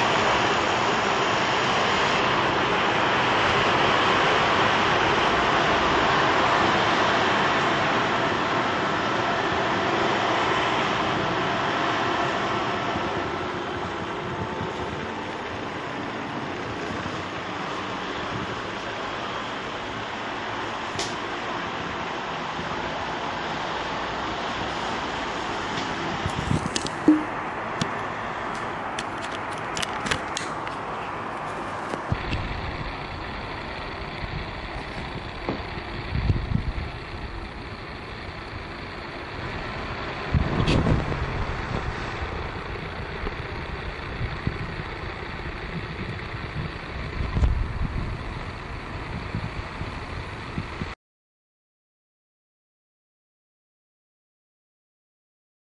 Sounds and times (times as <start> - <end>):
Wind: 0.0 - 51.0.